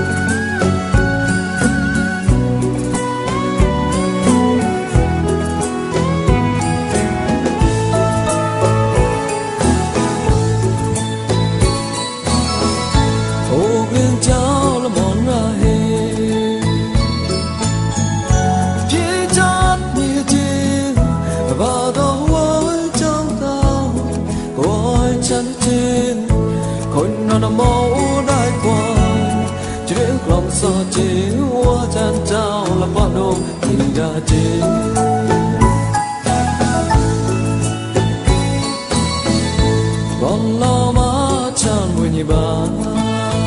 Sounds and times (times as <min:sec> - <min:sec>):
Independent music: 0:00.0 - 0:43.4.